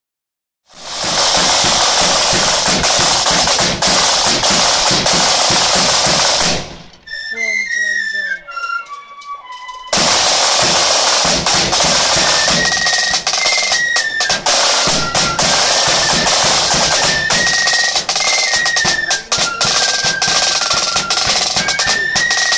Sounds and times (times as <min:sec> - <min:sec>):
Drum: 0:00.7 - 0:07.1, 0:09.9 - 0:22.5.